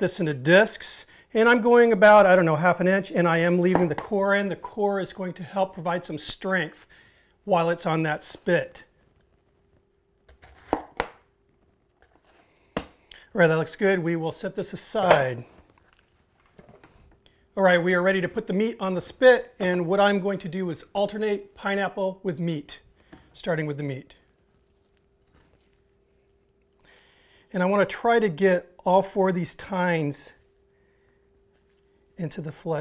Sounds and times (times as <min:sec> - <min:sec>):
Speech: 0:00.0 - 0:06.9, 0:07.5 - 0:08.9, 0:13.3 - 0:15.5, 0:17.6 - 0:24.2, 0:27.5 - 0:30.4, 0:32.2 - 0:32.8
Inside, small room: 0:00.0 - 0:32.8.